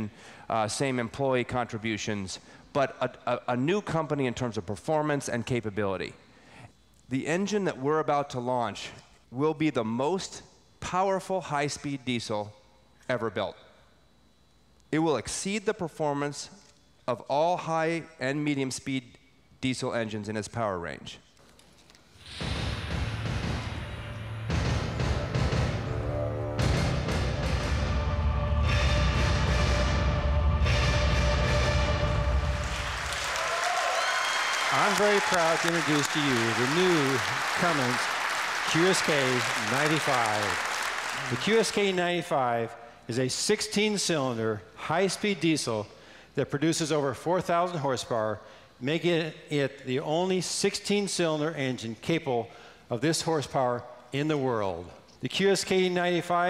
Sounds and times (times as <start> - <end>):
Speech: 0.0 - 6.2, 7.1 - 13.6, 14.9 - 21.3, 34.7 - 38.1, 38.7 - 40.6, 41.2 - 56.5.